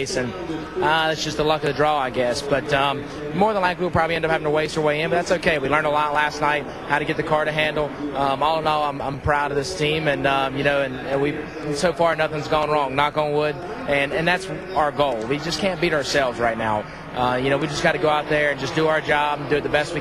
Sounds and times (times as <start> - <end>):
Speech: 0.0 - 20.0.